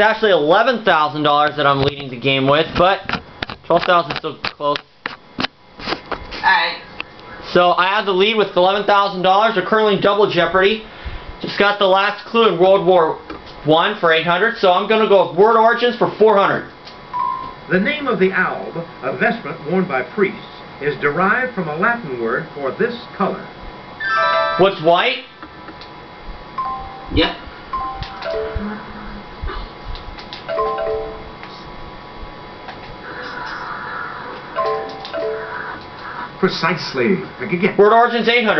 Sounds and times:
Speech: 0.0s - 3.1s, 7.5s - 16.7s, 17.7s - 23.6s, 36.4s - 38.5s
Music: 24.0s - 24.8s.

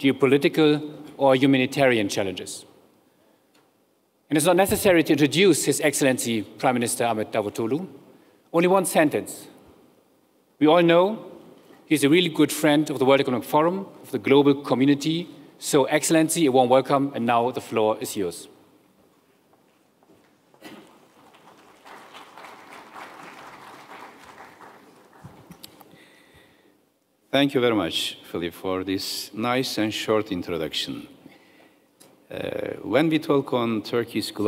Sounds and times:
Speech: 0.0s - 2.7s, 4.3s - 9.6s, 10.6s - 11.3s, 11.9s - 18.6s, 27.3s - 31.2s, 32.3s - 34.4s.

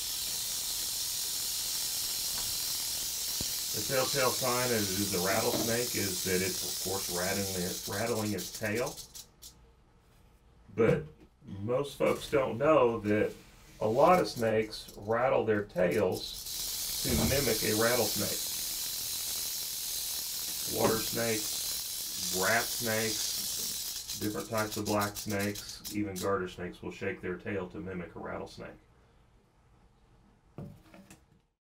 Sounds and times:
Snake: 0.0s - 9.6s, 13.7s - 26.5s.

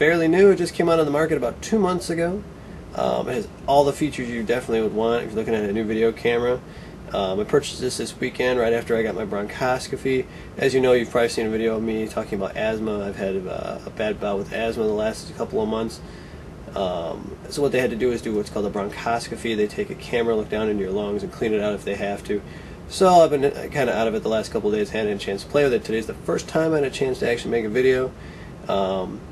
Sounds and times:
Speech: 0.0s - 16.1s, 16.7s - 29.3s.

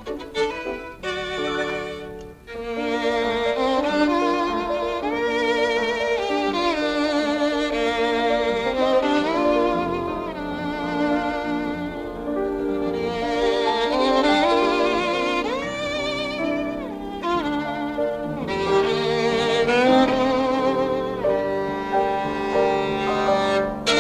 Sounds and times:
Violin, fiddle: 0.0s - 24.0s.

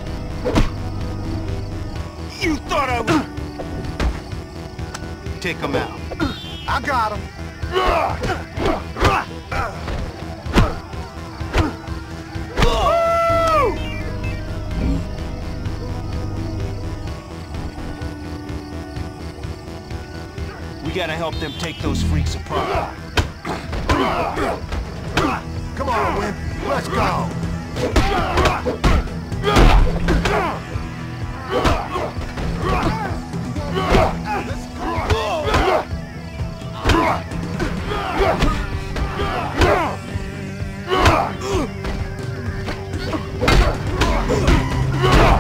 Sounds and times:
Music: 0.0s - 45.4s.

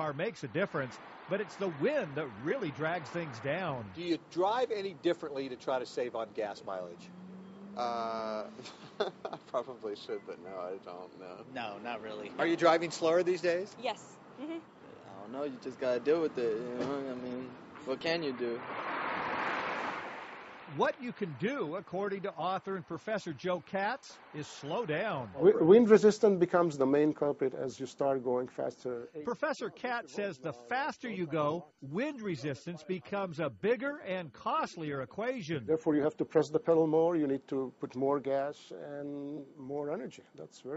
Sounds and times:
Speech: 0.0s - 7.1s, 7.8s - 18.6s, 20.7s - 40.7s
Car passing by: 0.8s - 14.4s, 15.0s - 21.0s.

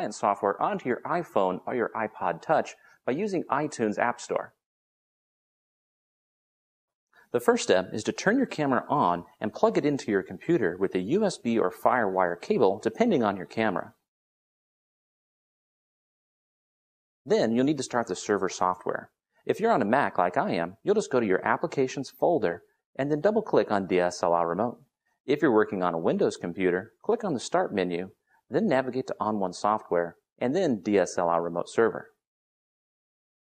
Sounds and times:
Speech: 0.0s - 4.6s, 7.4s - 14.0s, 17.3s - 32.2s.

